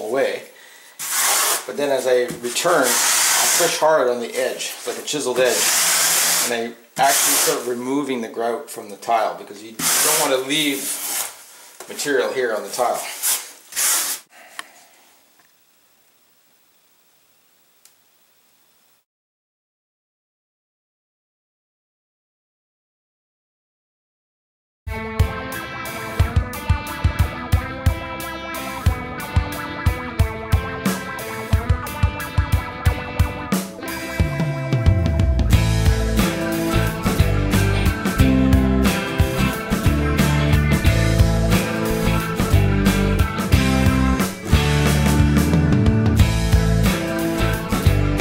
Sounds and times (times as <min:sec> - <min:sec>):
Speech: 0:00.0 - 0:00.5, 0:01.7 - 0:05.7, 0:06.4 - 0:11.0, 0:11.8 - 0:13.2.